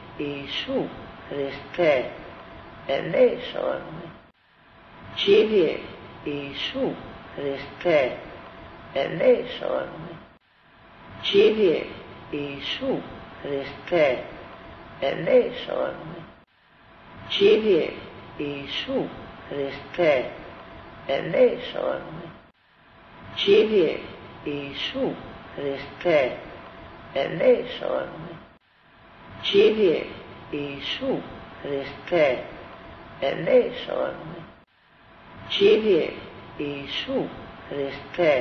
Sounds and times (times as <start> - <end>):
Speech: 0.2 - 2.3, 2.9 - 4.2, 5.1 - 8.4, 9.0 - 10.3, 11.2 - 16.4, 17.3 - 20.5, 21.1 - 22.4, 23.3 - 28.5, 29.4 - 34.6, 35.5 - 38.4.